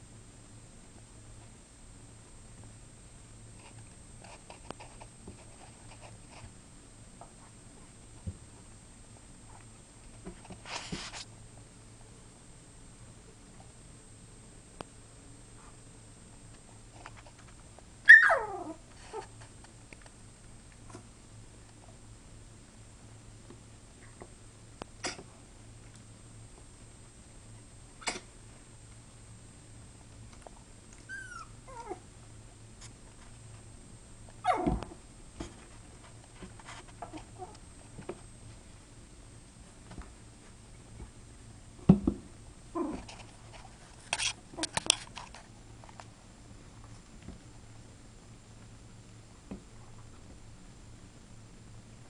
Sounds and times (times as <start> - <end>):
Dog: 18.1 - 19.3, 34.4 - 34.9.